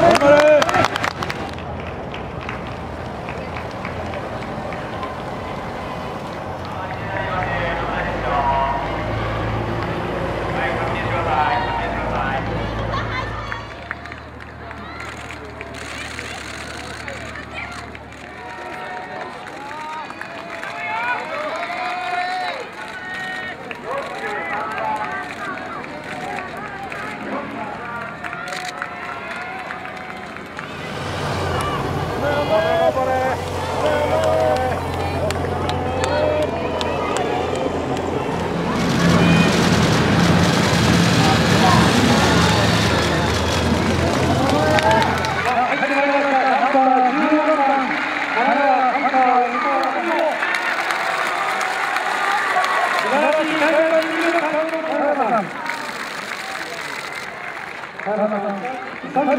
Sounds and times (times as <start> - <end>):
Outside, urban or manmade: 0.0 - 59.3.